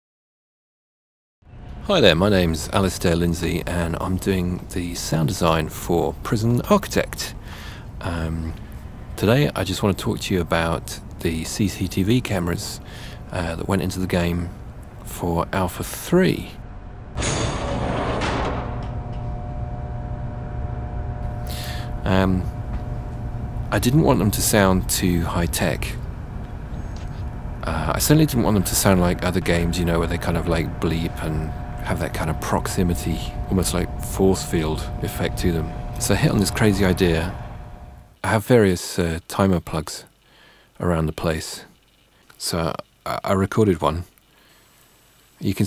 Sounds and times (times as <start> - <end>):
Speech: 1.9 - 7.4, 8.0 - 8.6, 9.2 - 16.6, 21.5 - 22.6, 23.7 - 26.0, 27.6 - 37.4, 38.2 - 40.1, 40.8 - 44.2, 45.4 - 45.6.